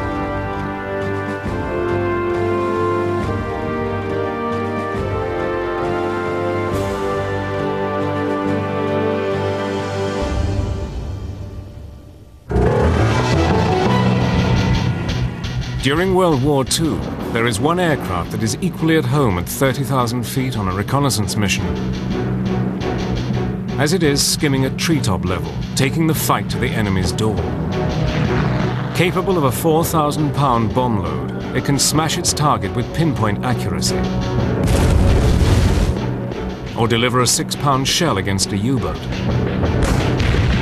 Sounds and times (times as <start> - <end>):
Music: 0.0 - 40.6
Speech: 15.8 - 21.8, 23.8 - 27.4, 29.0 - 34.1, 36.8 - 39.1.